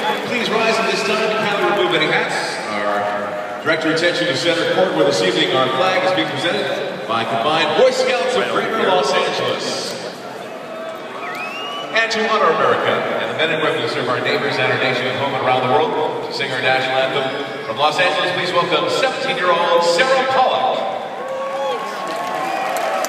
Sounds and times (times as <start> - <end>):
Speech: 0.0 - 10.1, 11.9 - 21.0.